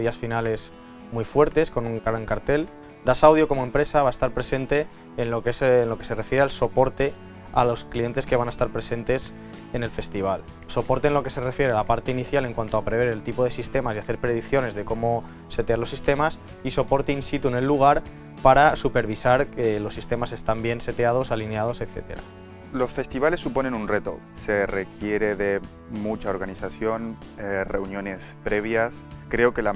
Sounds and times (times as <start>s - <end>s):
Music: 0.0s - 29.7s
Speech: 0.0s - 29.7s.